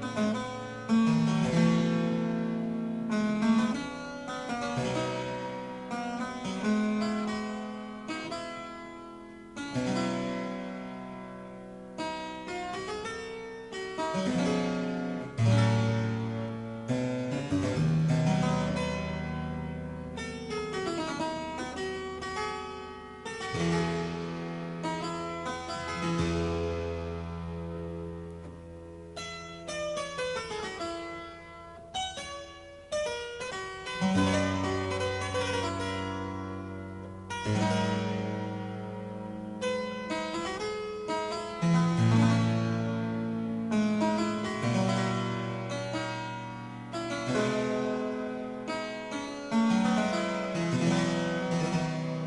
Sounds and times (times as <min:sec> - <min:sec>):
Harpsichord: 0:00.0 - 0:52.2.